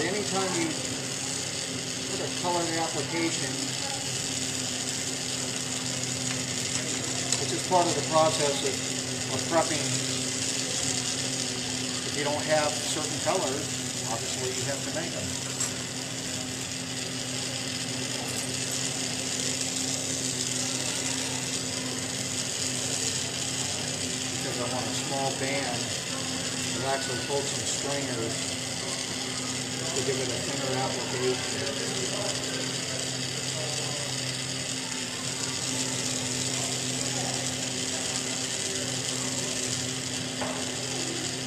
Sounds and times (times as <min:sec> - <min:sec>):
Speech: 0:00.0 - 0:00.9, 0:02.1 - 0:04.2, 0:07.3 - 0:11.0, 0:12.0 - 0:15.4, 0:24.4 - 0:29.1, 0:29.7 - 0:39.6.